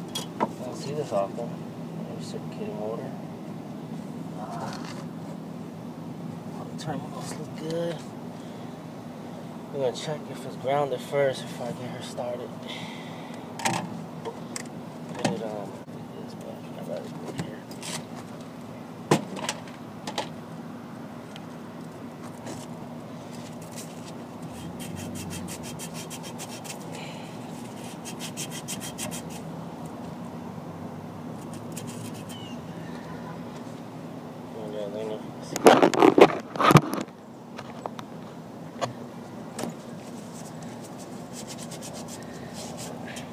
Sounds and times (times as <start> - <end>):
Speech: 0.6 - 3.2, 6.6 - 8.1, 9.7 - 12.5, 15.2 - 17.7, 34.6 - 35.7.